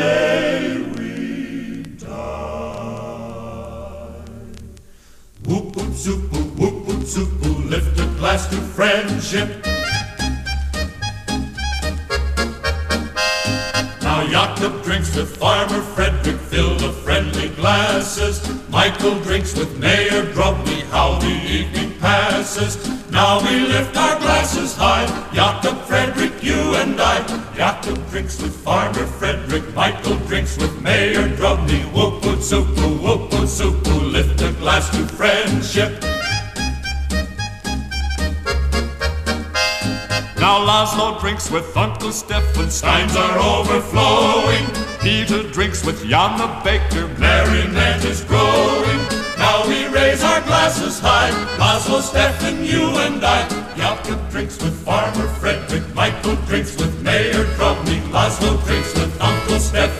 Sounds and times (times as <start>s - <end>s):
Choir: 0.0s - 4.8s, 5.5s - 9.7s, 14.0s - 36.2s, 42.7s - 59.9s.